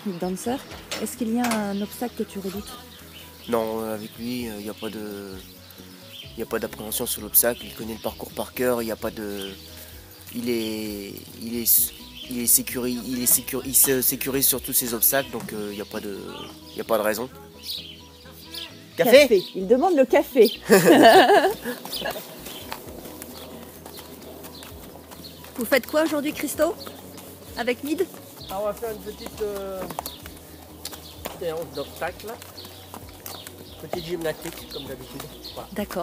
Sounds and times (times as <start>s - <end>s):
Music: 0.0s - 36.0s.